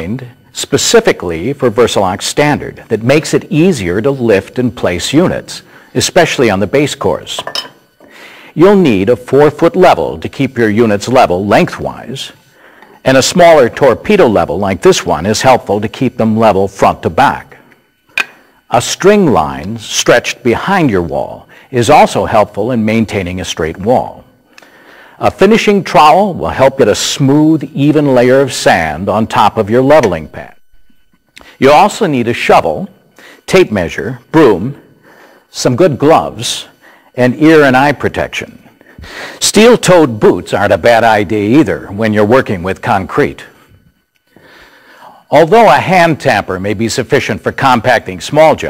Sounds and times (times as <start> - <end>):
Speech: 0.0 - 7.5, 8.6 - 12.4, 13.0 - 17.6, 18.7 - 24.2, 25.2 - 30.6, 31.6 - 32.9, 33.5 - 34.8, 35.5 - 38.7, 39.4 - 43.6, 45.3 - 48.6.